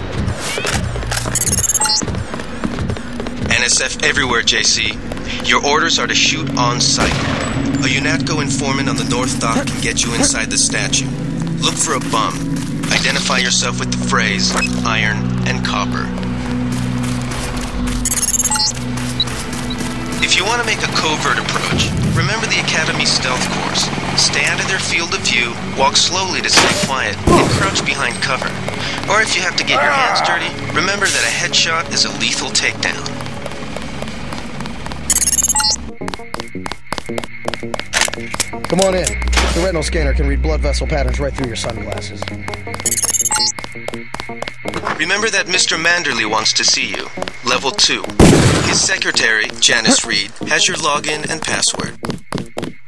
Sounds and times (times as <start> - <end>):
Speech: 3.4 - 7.1, 7.8 - 11.0, 11.6 - 16.1, 20.2 - 33.1, 45.0 - 52.0.